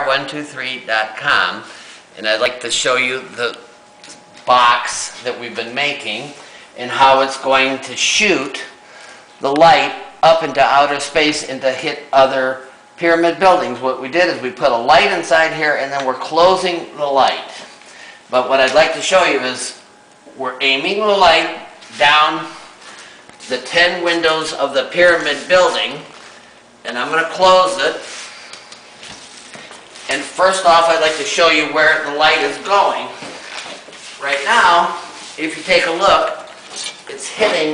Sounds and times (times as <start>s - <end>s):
Speech: 0.0s - 3.7s, 4.5s - 8.8s, 9.4s - 17.6s, 18.3s - 22.6s, 23.4s - 26.1s, 26.8s - 28.1s, 30.1s - 33.2s, 34.2s - 36.5s, 37.1s - 37.7s.